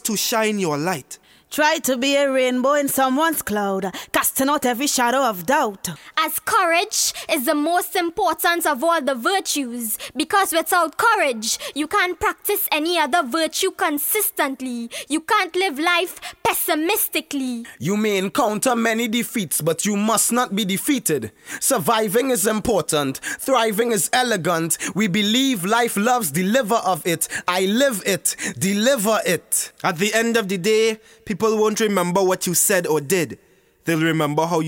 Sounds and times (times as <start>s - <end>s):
Narration, monologue: 0.0s - 34.6s
Female speech, woman speaking: 1.5s - 20.7s, 21.7s - 24.6s.